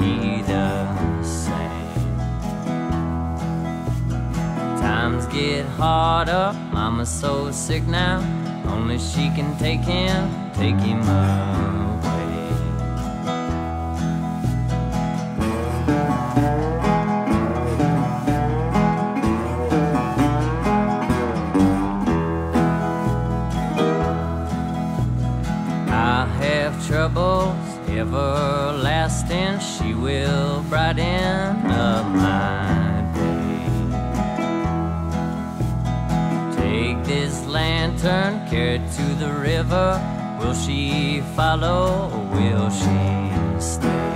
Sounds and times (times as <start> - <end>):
Acoustic guitar: 0.0 - 44.1.